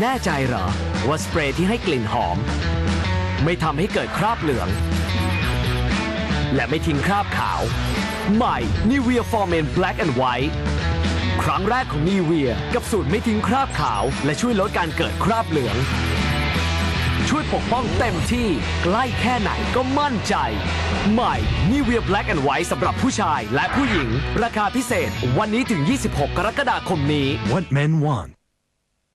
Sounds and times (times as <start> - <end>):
Speech: 0.0 - 2.5, 3.4 - 4.8, 6.5 - 7.7, 8.3 - 10.6, 11.4 - 15.9, 17.2 - 28.4
Music: 0.0 - 28.4.